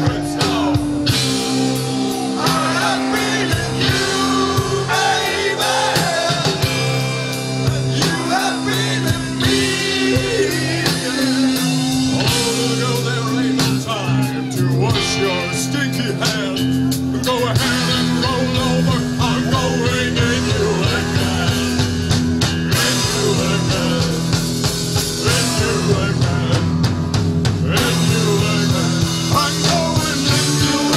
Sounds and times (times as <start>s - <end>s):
Crowd: 0.0s - 30.9s
Progressive rock: 0.0s - 30.9s.